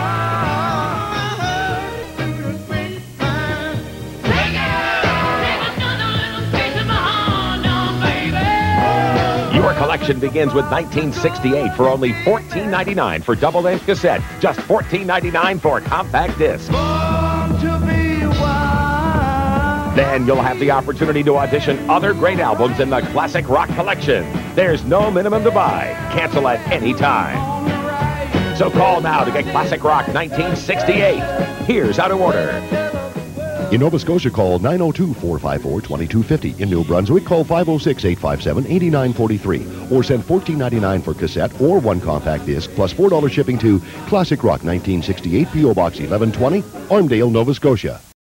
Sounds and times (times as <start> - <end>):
Song: 0.0 - 47.2
Speech: 9.5 - 16.8, 20.0 - 27.4, 28.6 - 32.7, 33.7 - 48.2.